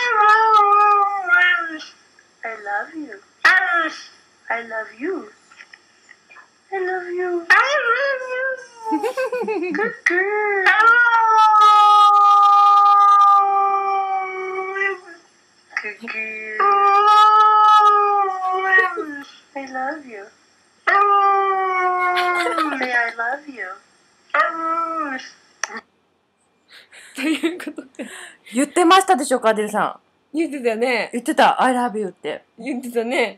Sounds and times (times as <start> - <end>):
Speech: 22.2 - 23.8, 27.2 - 33.3.